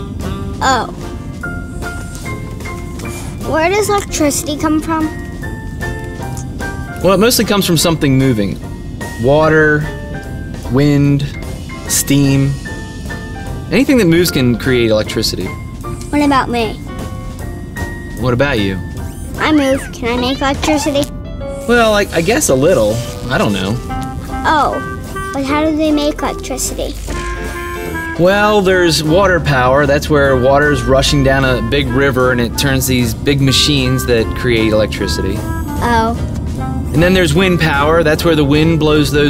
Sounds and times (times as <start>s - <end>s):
Music: 0.0s - 39.2s.